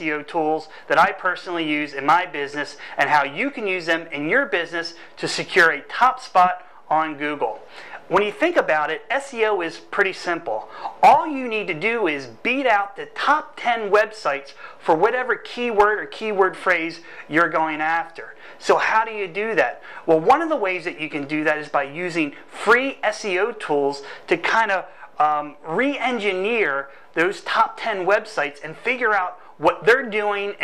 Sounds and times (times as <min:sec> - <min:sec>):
Speech: 0:00.0 - 0:30.6.